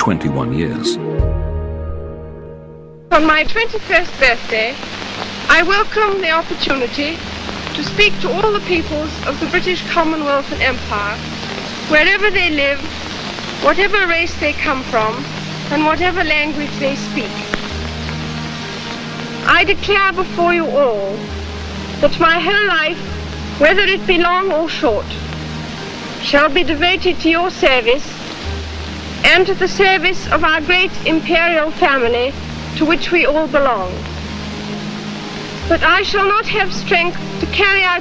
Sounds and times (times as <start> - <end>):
Narration, monologue: 0.0 - 1.8, 5.5 - 34.9, 35.6 - 38.0
Music: 0.0 - 38.0
Female speech, woman speaking: 3.1 - 4.8, 5.5 - 7.2, 7.8 - 11.2, 11.9 - 12.9, 13.6 - 17.5, 19.4 - 21.2, 22.0 - 23.0, 23.6 - 25.2, 26.2 - 28.2, 29.2 - 34.0, 35.7 - 38.0.